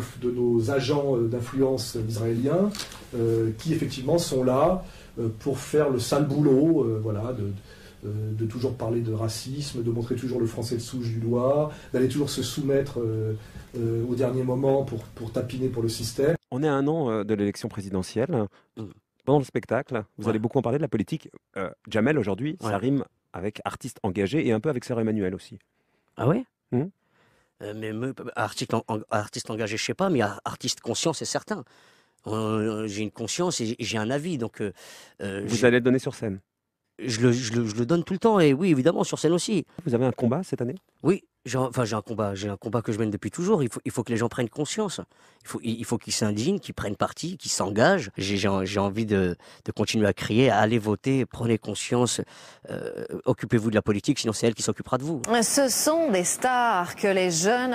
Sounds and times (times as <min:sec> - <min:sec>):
Speech: 0:00.0 - 0:25.6, 0:26.2 - 0:26.9, 0:27.6 - 0:31.6, 0:32.3 - 0:36.4, 0:37.0 - 0:57.7.